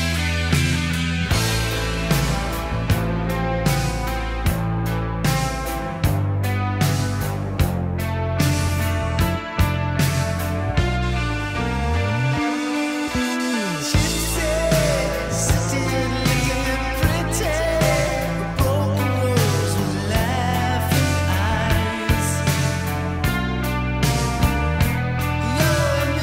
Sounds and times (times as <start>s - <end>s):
Bass drum: 0.0s - 12.4s, 14.0s - 26.2s
Drum kit: 0.0s - 26.2s
Rock music: 0.0s - 26.2s.